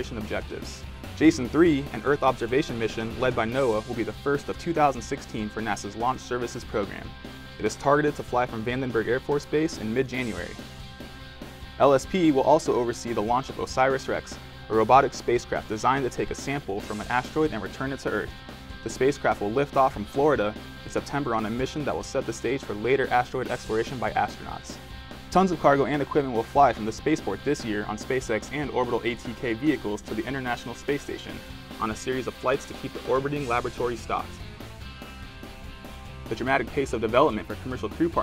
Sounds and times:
Speech: 0.0s - 10.6s, 11.8s - 34.4s, 36.3s - 38.2s
Music: 0.0s - 38.2s.

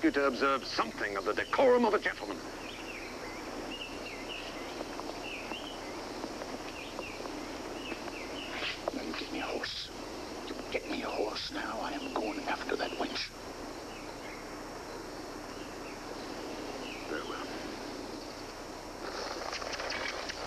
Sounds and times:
Speech: 0.0s - 2.4s, 8.9s - 9.9s, 10.7s - 13.3s, 17.1s - 17.5s.

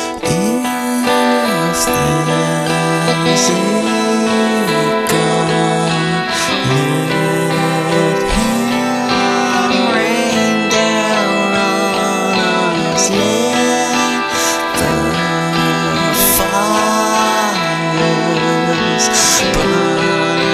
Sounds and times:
Music: 0.0s - 20.5s.

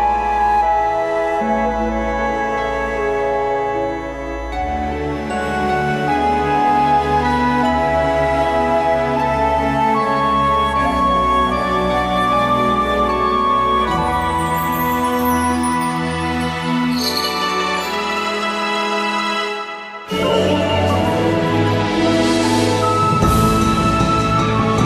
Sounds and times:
Music: 0.0s - 24.8s.

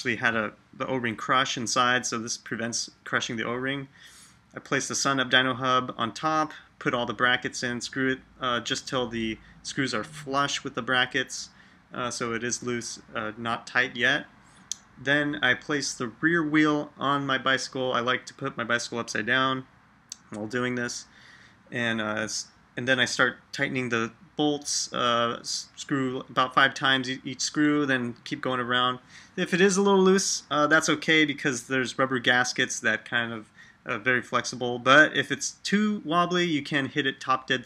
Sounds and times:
Speech: 0.0s - 4.0s, 4.6s - 21.1s, 21.7s - 37.6s.

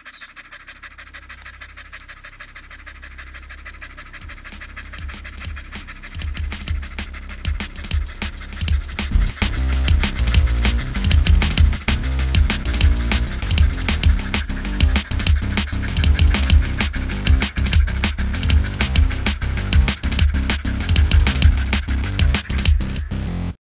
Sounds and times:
Bass drum: 4.2s - 23.6s
Drum kit: 4.2s - 23.6s.

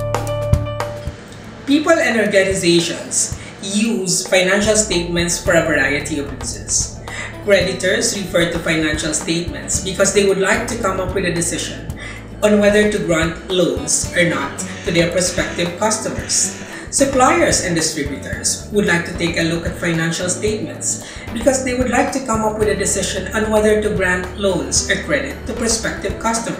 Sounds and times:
Music: 0.0s - 26.5s
Speech: 1.7s - 26.5s.

